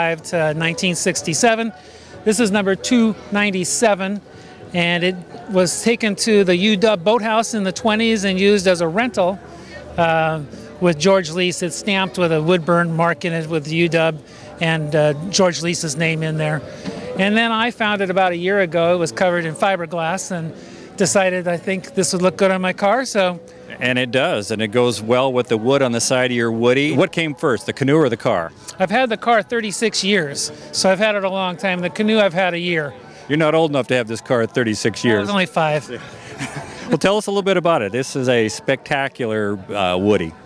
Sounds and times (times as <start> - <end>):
Speech: 0.0 - 9.4, 10.0 - 36.1, 36.9 - 40.4
Music: 0.0 - 40.4.